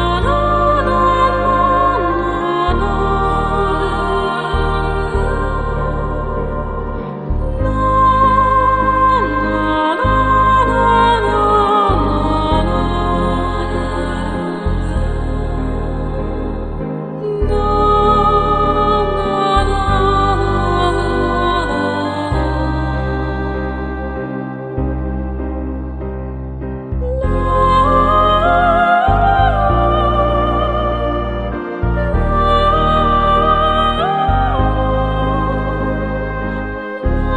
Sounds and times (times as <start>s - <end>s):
New-age music: 0.0s - 37.3s.